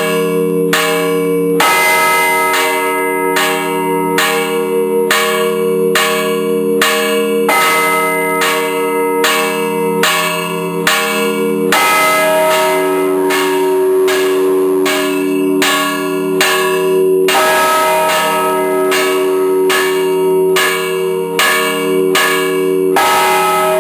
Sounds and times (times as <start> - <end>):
Church bell: 0.0 - 23.8.